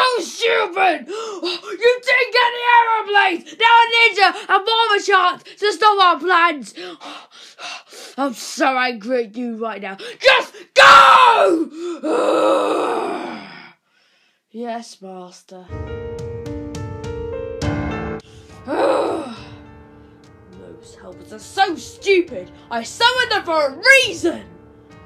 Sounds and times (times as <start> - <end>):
Speech: 0.0 - 6.8, 8.2 - 11.6, 14.5 - 15.7, 20.6 - 24.5
Inside, small room: 0.0 - 25.0
Music: 15.7 - 25.0.